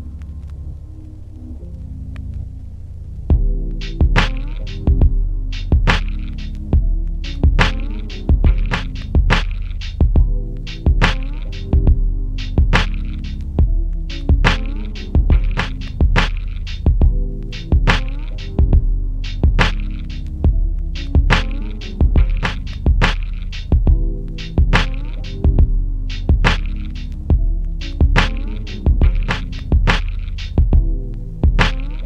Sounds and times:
Music: 0.0s - 32.0s.

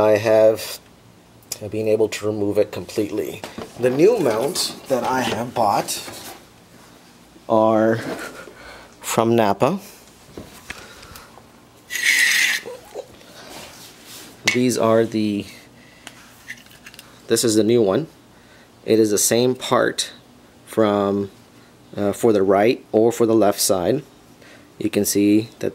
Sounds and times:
Speech: 0.0s - 0.8s, 1.5s - 6.2s, 7.5s - 8.2s, 9.0s - 9.9s, 14.5s - 15.7s, 17.3s - 18.1s, 18.8s - 24.1s, 24.8s - 25.7s
Inside, small room: 0.0s - 25.7s.

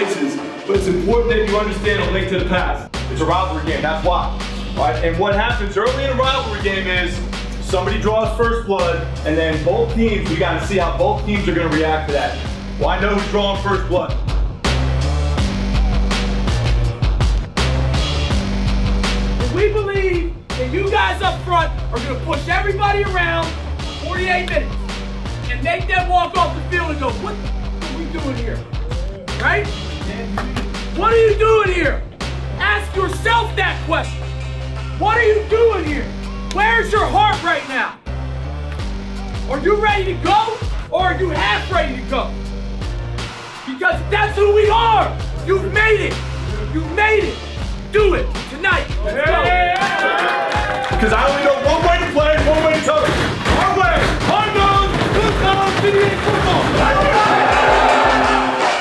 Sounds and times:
Speech: 0.0s - 14.2s, 19.4s - 24.7s, 35.0s - 38.0s, 39.5s - 42.3s, 43.7s - 47.4s, 51.0s - 57.2s
Music: 0.0s - 58.8s.

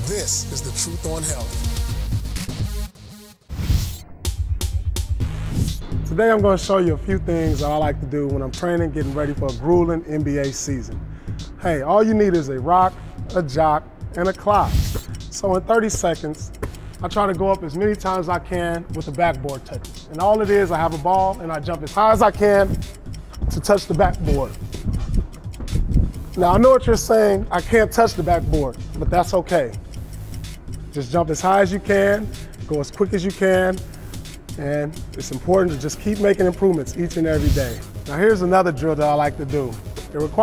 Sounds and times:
Speech: 0.0s - 1.6s, 6.1s - 10.9s, 11.6s - 14.7s, 15.3s - 22.7s, 23.5s - 24.5s, 26.4s - 29.7s, 31.0s - 33.8s, 34.6s - 40.4s
Music: 0.0s - 40.4s
Tick: 14.2s - 40.4s.

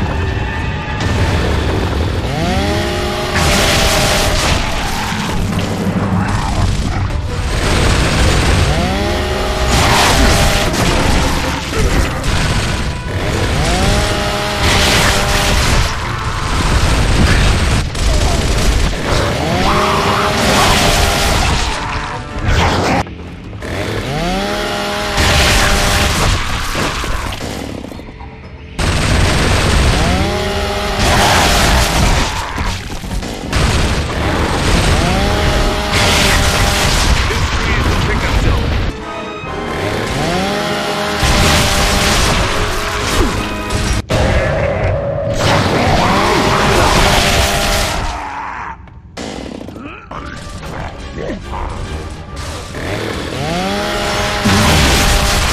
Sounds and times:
Music: 4.7s - 24.2s, 26.2s - 33.5s, 37.5s - 47.0s, 49.2s - 53.4s.

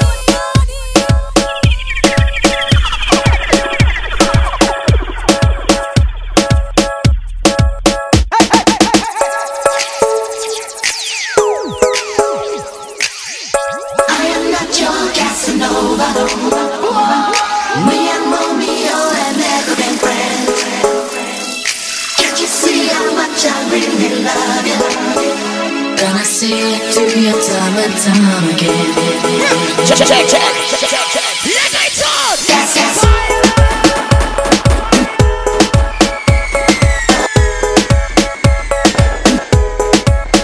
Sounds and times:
Music: 0.0s - 40.4s.

